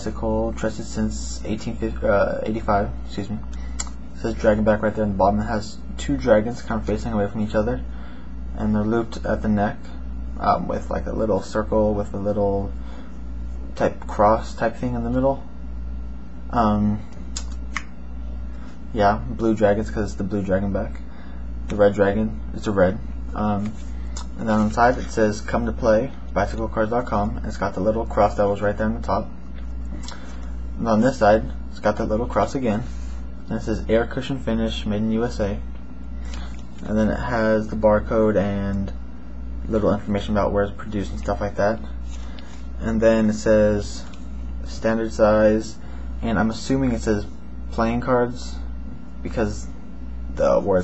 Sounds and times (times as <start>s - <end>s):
Speech: 0.0s - 7.9s, 8.5s - 12.8s, 13.7s - 15.5s, 16.5s - 17.2s, 18.9s - 21.1s, 21.7s - 29.4s, 30.8s - 35.7s, 36.8s - 39.0s, 39.6s - 42.0s, 42.8s - 50.8s.